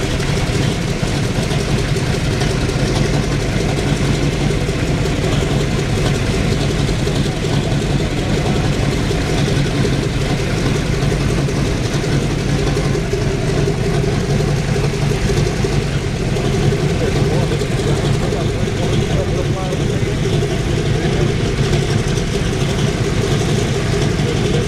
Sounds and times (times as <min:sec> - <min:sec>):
Heavy engine (low frequency): 0:00.0 - 0:24.6
Idling: 0:00.0 - 0:24.6
Vehicle: 0:00.0 - 0:24.6.